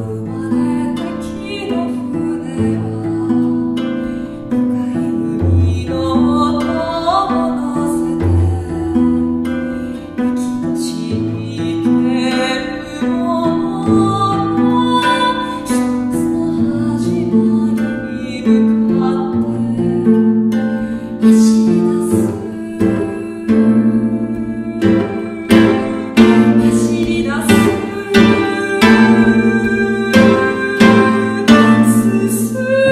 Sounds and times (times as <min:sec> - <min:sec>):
Music: 0:00.0 - 0:32.9.